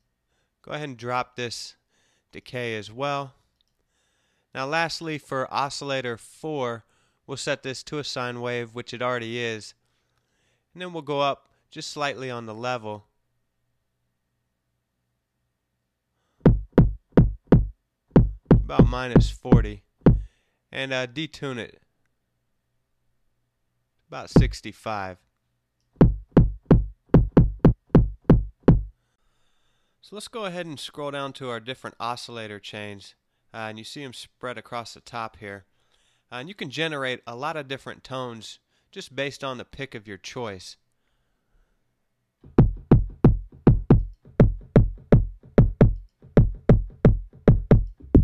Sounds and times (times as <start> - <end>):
Drum machine: 16.5 - 20.3, 24.4 - 24.6, 26.0 - 28.9, 42.5 - 48.2.